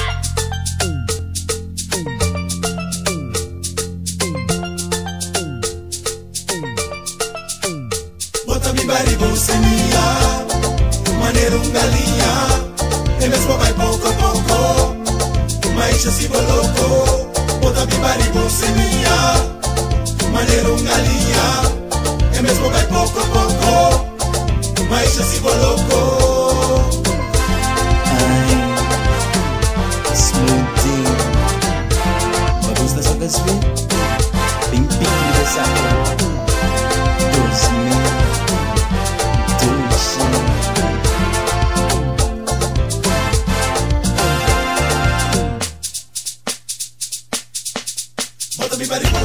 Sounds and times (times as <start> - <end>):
Music: 0.0 - 49.2
Speech: 30.2 - 31.2, 32.6 - 33.7, 34.7 - 36.4, 37.2 - 38.2, 39.6 - 40.6.